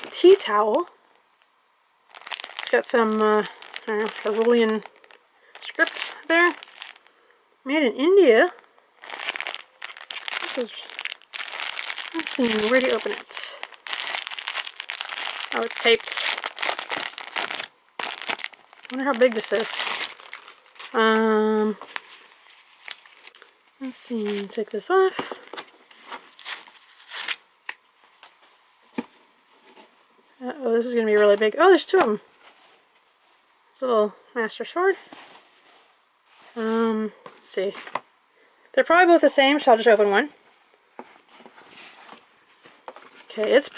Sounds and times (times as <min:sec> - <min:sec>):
Speech: 0:00.0 - 0:00.9, 0:02.6 - 0:04.8, 0:05.6 - 0:06.6, 0:07.7 - 0:08.6, 0:10.4 - 0:10.9, 0:12.2 - 0:13.6, 0:15.5 - 0:16.2, 0:18.9 - 0:19.7, 0:20.9 - 0:21.8, 0:23.8 - 0:25.4, 0:30.4 - 0:32.2, 0:33.8 - 0:35.0, 0:36.6 - 0:37.8, 0:38.8 - 0:40.3, 0:43.3 - 0:43.7
Crumpling, crinkling: 0:02.1 - 0:07.1, 0:08.5 - 0:29.9, 0:41.0 - 0:43.7.